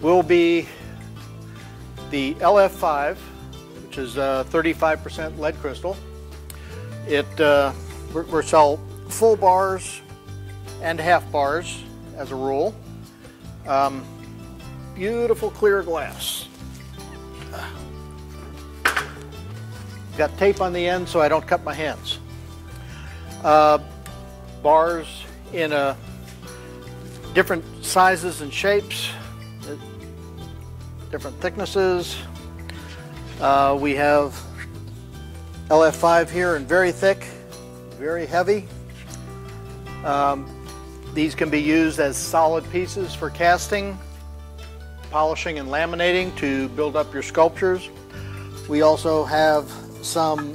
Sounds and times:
Speech: 0.0 - 0.8, 2.1 - 3.2, 3.9 - 6.0, 7.1 - 10.0, 10.8 - 12.8, 13.7 - 14.0, 15.0 - 16.5, 20.2 - 22.2, 23.4 - 23.8, 24.6 - 26.0, 27.4 - 29.8, 31.1 - 32.3, 33.4 - 34.4, 35.7 - 37.4, 38.0 - 38.7, 40.0 - 40.4, 41.2 - 44.0, 45.1 - 47.9, 48.7 - 50.5
Music: 0.0 - 50.5.

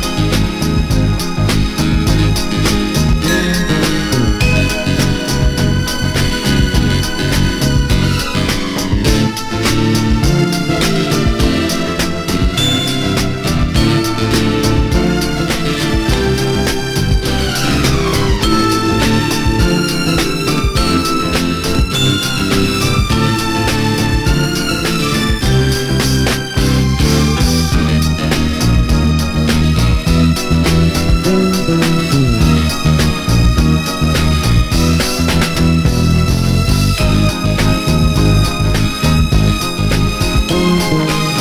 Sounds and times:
Psychedelic rock: 0.0 - 41.4.

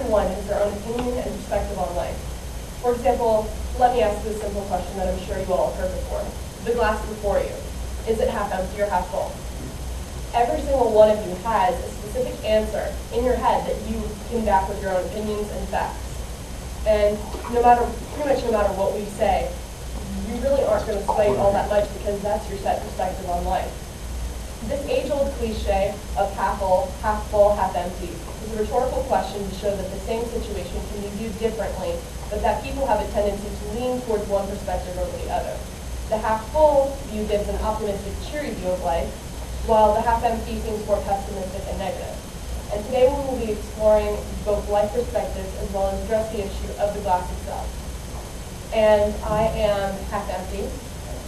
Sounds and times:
Female speech, woman speaking: 0.0 - 2.2, 2.8 - 9.4, 10.4 - 16.0, 16.9 - 23.8, 24.6 - 39.1, 39.7 - 47.7, 48.7 - 50.8
Narration, monologue: 0.0 - 51.2.

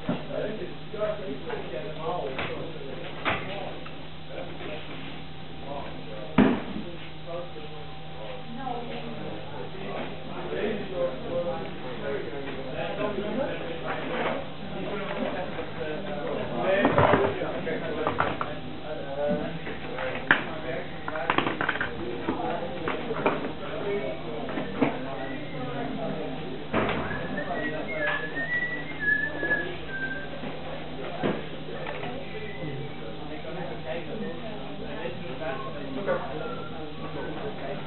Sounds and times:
Speech: 0.0 - 37.8.

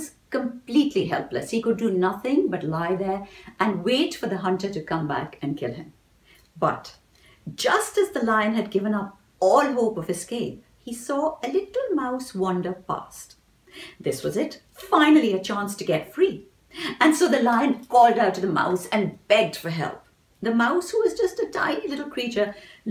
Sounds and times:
Speech: 0.0 - 5.9, 6.6 - 13.4, 14.0 - 22.9.

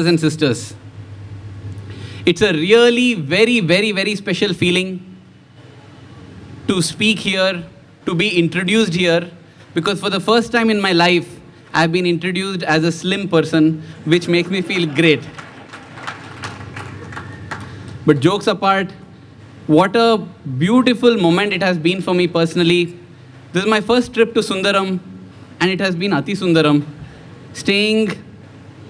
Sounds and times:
Male speech, man speaking: 0.0 - 0.8, 2.3 - 5.1, 6.7 - 15.3, 18.1 - 19.0, 19.7 - 25.0, 25.6 - 26.9, 27.6 - 28.3
Narration, monologue: 0.0 - 15.8, 17.6 - 28.9.

